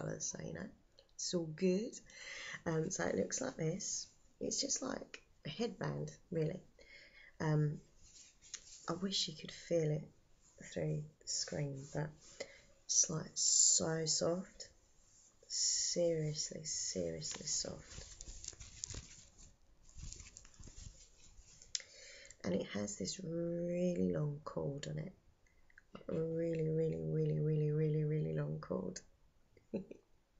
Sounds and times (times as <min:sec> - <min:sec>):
Speech: 0:00.0 - 0:06.7, 0:07.4 - 0:07.8, 0:08.8 - 0:12.2, 0:12.9 - 0:14.7, 0:15.5 - 0:18.0, 0:22.4 - 0:25.2, 0:26.0 - 0:29.1
Inside, small room: 0:00.0 - 0:30.3.